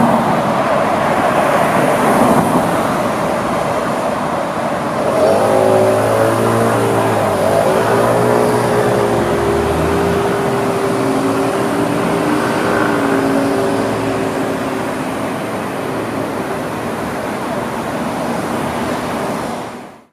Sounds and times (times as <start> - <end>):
Car: 0.0 - 20.1.